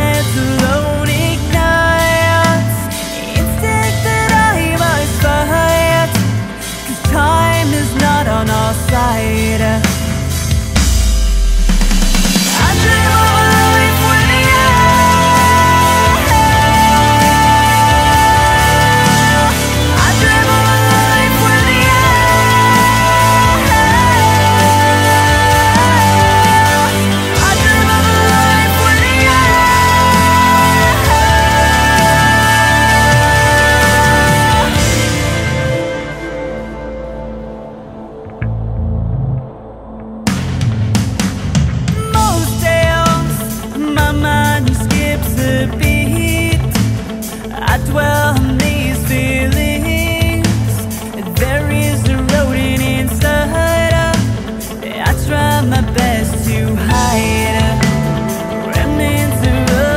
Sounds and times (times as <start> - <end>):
Tender music: 0.0 - 59.9.